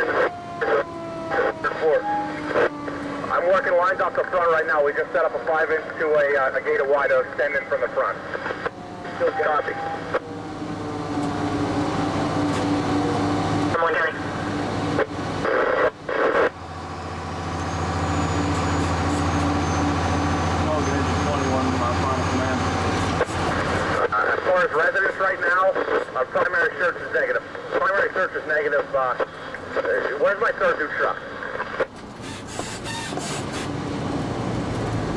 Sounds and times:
Speech: 0:00.0 - 0:02.7, 0:03.3 - 0:08.2, 0:09.2 - 0:10.0, 0:13.8 - 0:14.3, 0:20.6 - 0:22.7, 0:24.0 - 0:31.2
Engine: 0:00.0 - 0:35.1
Vehicle: 0:00.0 - 0:35.1.

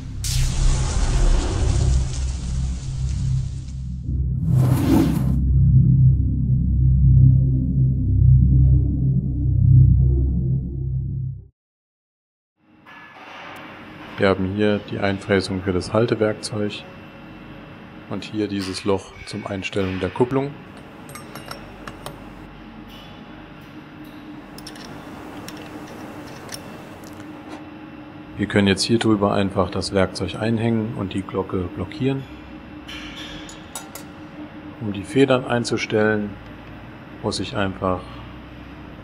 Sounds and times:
Speech: 0:14.1 - 0:16.9, 0:18.1 - 0:20.6, 0:28.4 - 0:32.3, 0:34.8 - 0:36.4, 0:37.2 - 0:38.2.

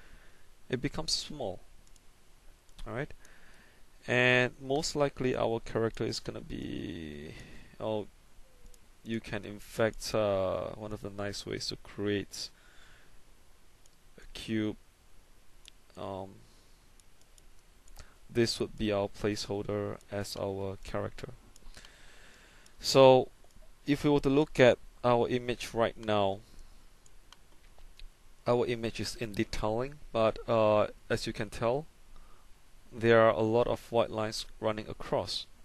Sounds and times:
Speech: 0:00.7 - 0:01.6, 0:02.8 - 0:03.1, 0:04.1 - 0:08.1, 0:09.1 - 0:12.5, 0:14.2 - 0:14.8, 0:16.0 - 0:16.4, 0:18.3 - 0:21.4, 0:22.8 - 0:23.3, 0:23.9 - 0:26.4, 0:28.5 - 0:31.9, 0:33.0 - 0:35.5.

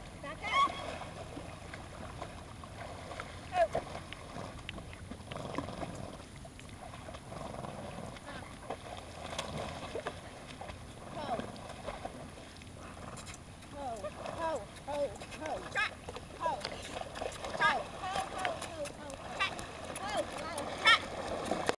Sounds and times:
Horse: 0:00.0 - 0:21.7
Speech: 0:17.6 - 0:21.0.

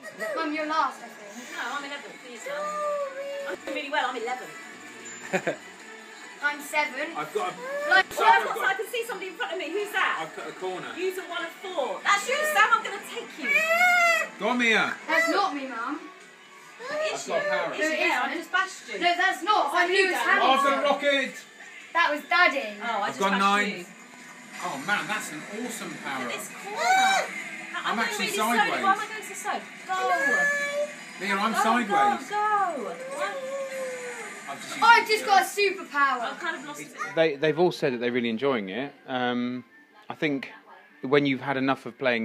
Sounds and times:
Music: 0:00.0 - 0:42.2.

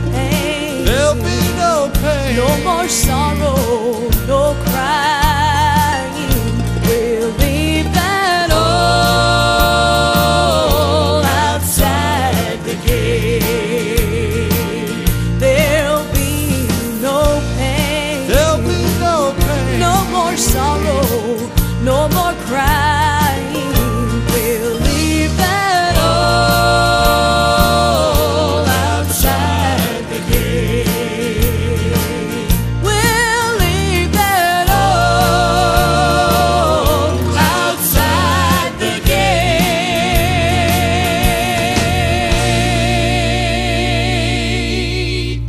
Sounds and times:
Music: 0:00.0 - 0:45.4.

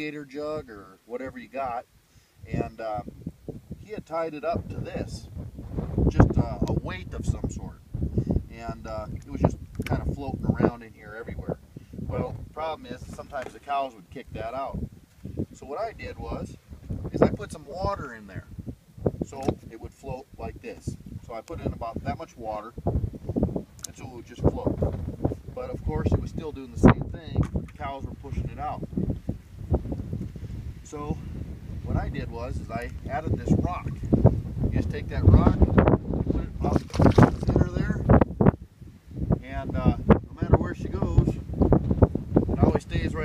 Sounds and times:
Speech: 0:00.0 - 0:01.9, 0:02.5 - 0:03.1, 0:03.8 - 0:05.3, 0:06.1 - 0:07.8, 0:08.5 - 0:14.8, 0:15.6 - 0:18.5, 0:19.3 - 0:22.7, 0:23.9 - 0:24.8, 0:25.6 - 0:28.8, 0:30.9 - 0:31.2, 0:31.9 - 0:34.0, 0:34.8 - 0:35.6, 0:36.3 - 0:38.0, 0:39.4 - 0:41.4, 0:42.6 - 0:43.2.

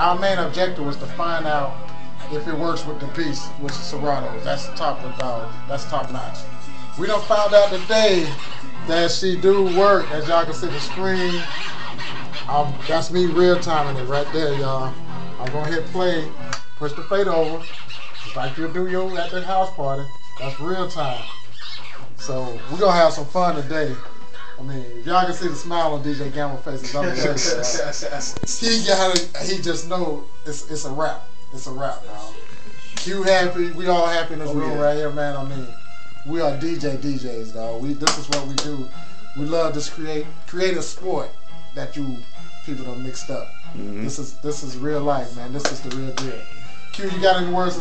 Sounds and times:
Speech: 0:00.0 - 0:01.7, 0:02.3 - 0:06.4, 0:07.0 - 0:11.6, 0:12.5 - 0:17.6, 0:18.4 - 0:21.3, 0:22.2 - 0:24.0, 0:24.6 - 0:32.4, 0:33.0 - 0:35.7, 0:36.3 - 0:47.8
Music: 0:00.0 - 0:47.8.

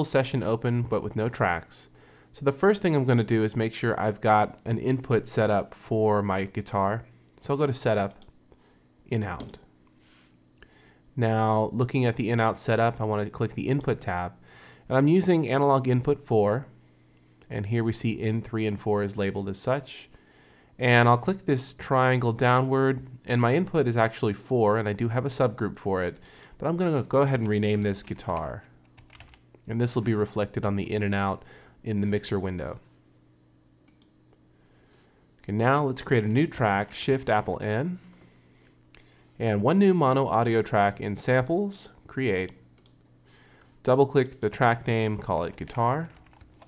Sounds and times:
Speech: 0:00.0 - 0:08.3, 0:09.1 - 0:09.7, 0:11.2 - 0:16.7, 0:17.5 - 0:20.2, 0:20.8 - 0:28.8, 0:29.7 - 0:32.9, 0:35.4 - 0:38.1, 0:39.4 - 0:42.6, 0:43.8 - 0:46.2.

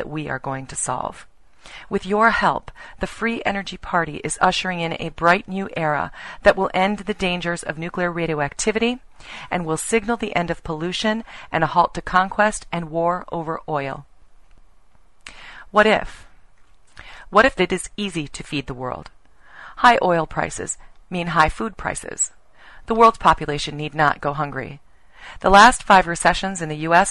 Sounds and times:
Female speech, woman speaking: 0:00.0 - 0:01.2, 0:01.9 - 0:14.1, 0:15.7 - 0:16.2, 0:17.4 - 0:19.1, 0:19.8 - 0:22.3, 0:22.9 - 0:24.8, 0:25.4 - 0:27.1.

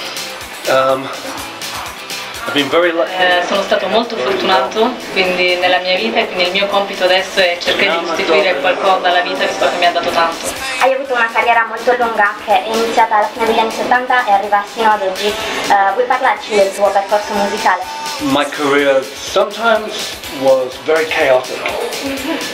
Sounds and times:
Music: 0:00.0 - 0:22.5
Speech: 0:02.5 - 0:21.9.

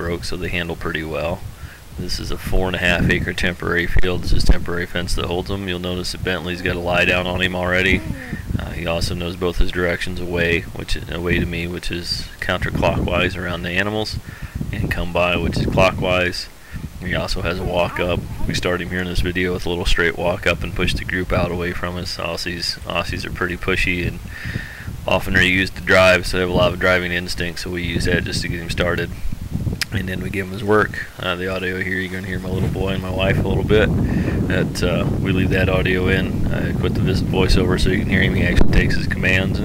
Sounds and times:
Speech: 0:00.0 - 0:01.4, 0:02.0 - 0:24.2, 0:25.0 - 0:29.2, 0:29.8 - 0:33.9, 0:34.5 - 0:39.6.

